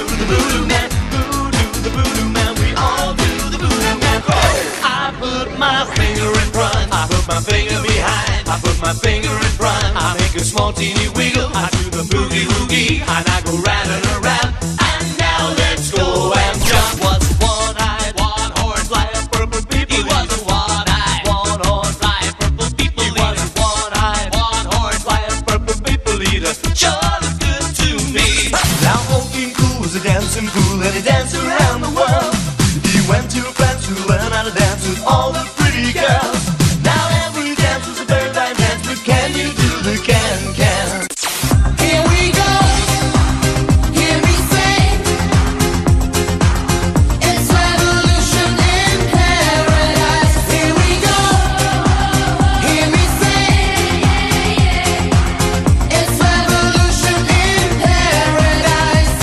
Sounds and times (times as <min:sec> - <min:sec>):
Music: 0:00.0 - 0:59.2.